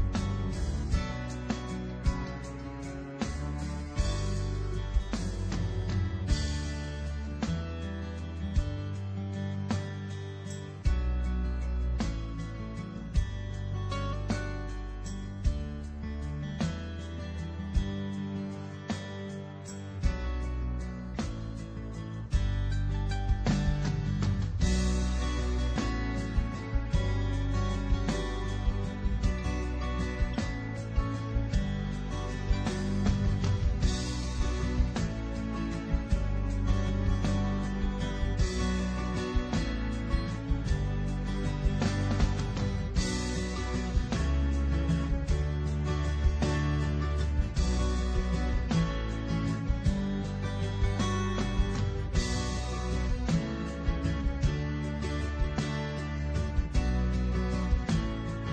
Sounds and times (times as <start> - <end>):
Music: 0.0 - 58.5.